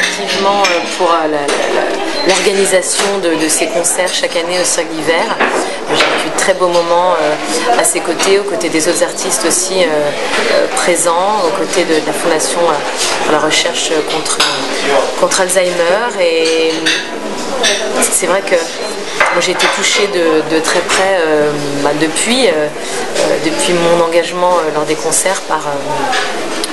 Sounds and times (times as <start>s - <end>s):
Speech: 0.0s - 26.7s.